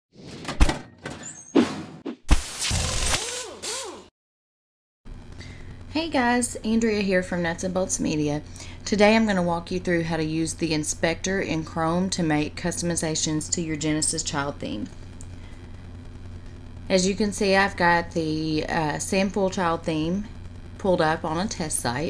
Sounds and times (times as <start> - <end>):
Speech: 5.9 - 14.9, 16.9 - 22.0.